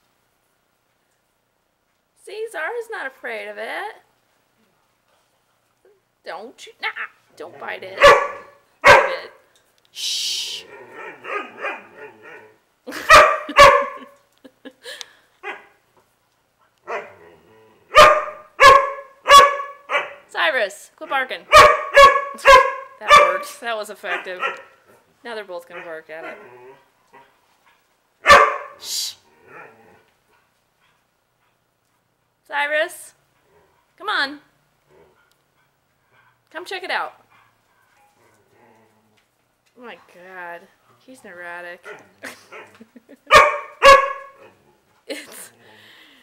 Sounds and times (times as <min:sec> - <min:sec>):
Speech: 0:02.2 - 0:04.0, 0:06.3 - 0:08.0, 0:20.3 - 0:21.5, 0:23.0 - 0:24.5, 0:25.2 - 0:26.4, 0:36.5 - 0:37.2, 0:39.8 - 0:41.9
Bark: 0:08.0 - 0:09.4, 0:11.0 - 0:12.4, 0:13.0 - 0:14.1, 0:15.4 - 0:15.8, 0:16.9 - 0:17.1, 0:17.9 - 0:20.3, 0:21.5 - 0:24.8, 0:28.2 - 0:28.8, 0:41.8 - 0:42.7, 0:43.3 - 0:44.4.